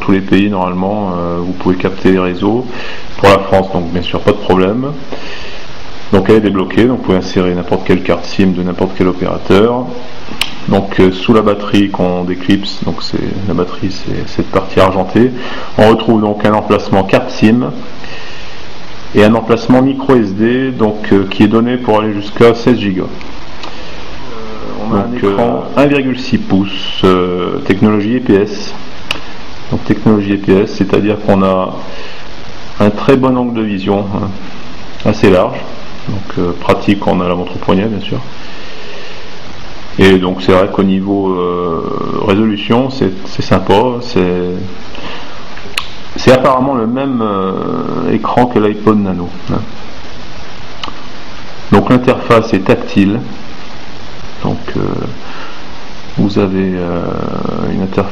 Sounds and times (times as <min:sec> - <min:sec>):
Speech: 0:00.0 - 0:05.1, 0:06.1 - 0:17.9, 0:19.1 - 0:23.2, 0:24.2 - 0:28.8, 0:29.7 - 0:32.0, 0:32.8 - 0:38.3, 0:40.0 - 0:44.8, 0:46.1 - 0:49.8, 0:51.7 - 0:53.4, 0:54.4 - 0:55.2, 0:56.2 - 0:58.1.